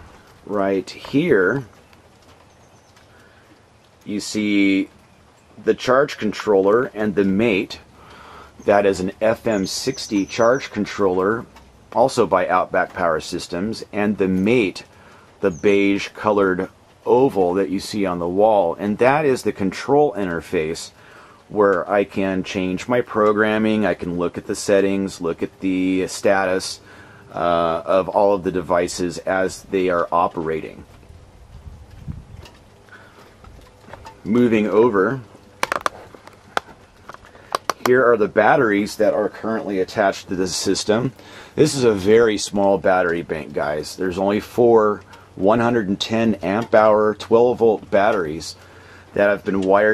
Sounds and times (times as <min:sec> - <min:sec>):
Speech: 0:00.4 - 0:01.8, 0:04.0 - 0:05.0, 0:05.6 - 0:07.9, 0:08.6 - 0:30.9, 0:34.2 - 0:35.3, 0:37.7 - 0:49.9.